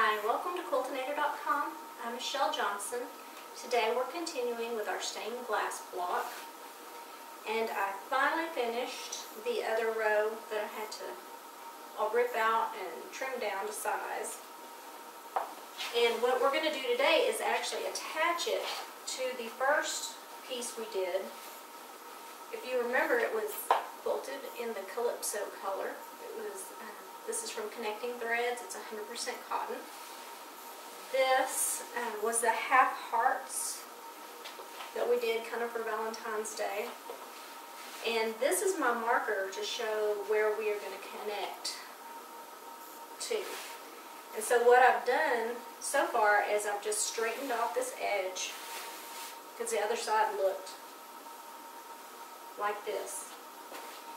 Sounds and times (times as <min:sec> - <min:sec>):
Speech: 0:00.0 - 0:06.5, 0:07.5 - 0:11.2, 0:12.0 - 0:14.4, 0:15.9 - 0:21.4, 0:22.5 - 0:29.9, 0:31.1 - 0:33.9, 0:34.9 - 0:37.0, 0:38.0 - 0:41.9, 0:43.2 - 0:43.7, 0:44.4 - 0:48.6, 0:49.6 - 0:50.8, 0:52.6 - 0:53.4.